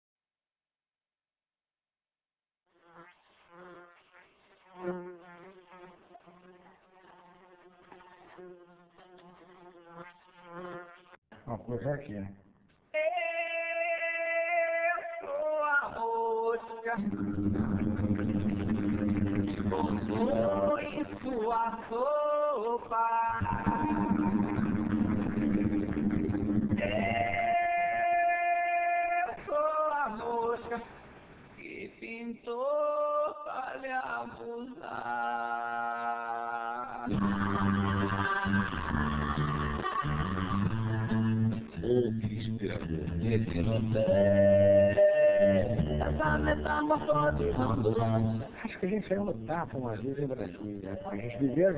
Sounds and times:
Bee, wasp, etc.: 2.7s - 11.2s
Fly, housefly: 2.7s - 11.2s.

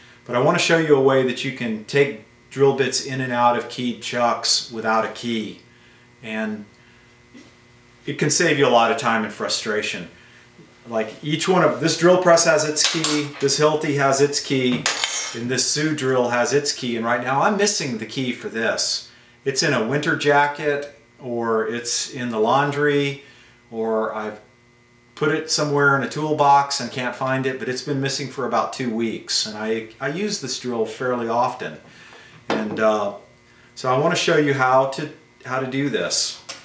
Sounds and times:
Speech: 0.3s - 5.6s, 6.2s - 6.7s, 8.0s - 10.2s, 10.8s - 24.5s, 25.2s - 31.8s, 32.5s - 36.5s.

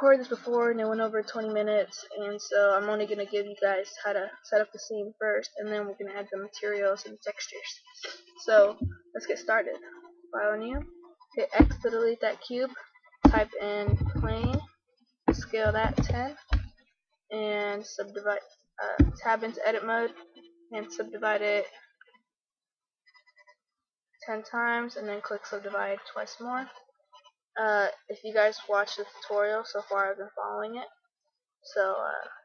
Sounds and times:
Speech: 0.0s - 14.6s, 15.3s - 16.5s, 17.3s - 20.2s, 20.8s - 21.8s, 24.2s - 26.7s, 27.6s - 30.9s, 31.7s - 32.4s.

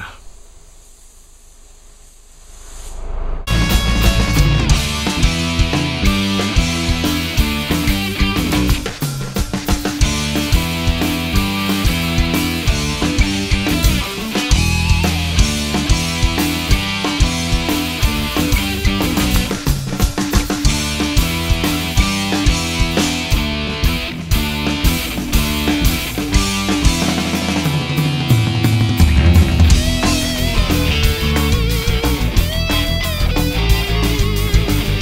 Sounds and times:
Music: 3.5s - 35.0s.

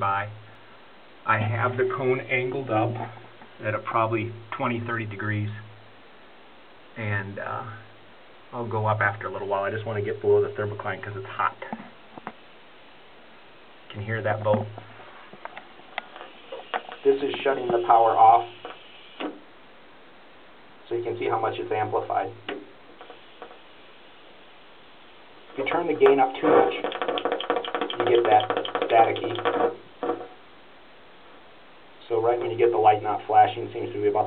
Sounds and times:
Speech: 0.0s - 0.4s, 1.2s - 5.7s, 7.0s - 7.9s, 8.5s - 11.9s, 13.9s - 14.8s, 17.0s - 18.6s, 20.8s - 22.6s, 25.6s - 27.0s, 27.9s - 29.5s, 32.0s - 34.2s.

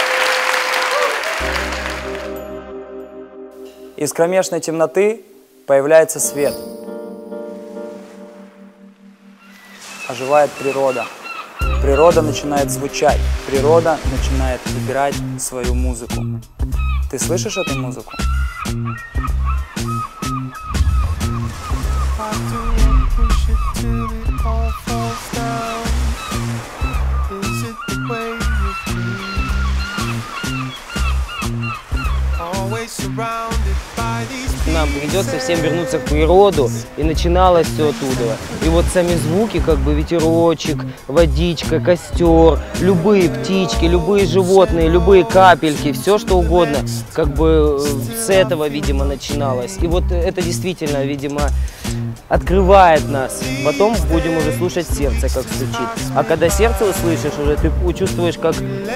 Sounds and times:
Music: 0.1s - 11.0s, 11.6s - 58.9s
Speech: 4.0s - 6.6s, 10.1s - 11.1s, 11.8s - 16.3s, 17.1s - 18.1s, 34.6s - 51.6s, 52.3s - 58.9s.

